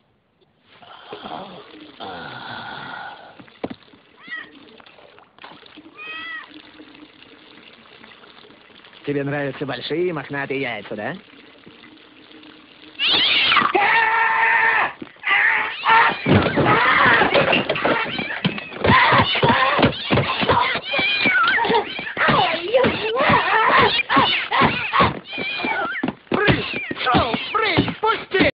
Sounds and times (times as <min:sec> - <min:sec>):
Meow: 0:04.2 - 0:04.5, 0:06.0 - 0:06.5, 0:20.8 - 0:22.1, 0:25.3 - 0:26.0
Caterwaul: 0:06.0 - 0:06.5, 0:13.0 - 0:27.9.